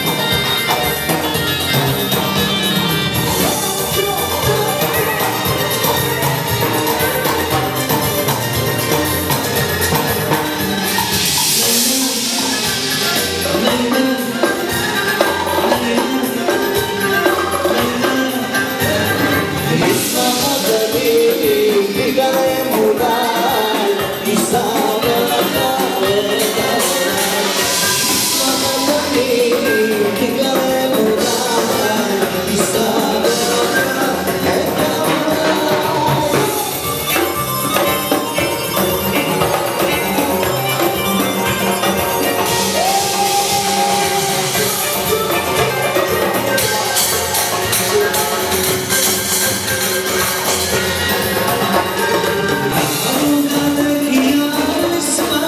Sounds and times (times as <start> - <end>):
Music: 0.0 - 55.4
Male singing: 11.4 - 36.9, 42.6 - 45.8, 51.3 - 55.4.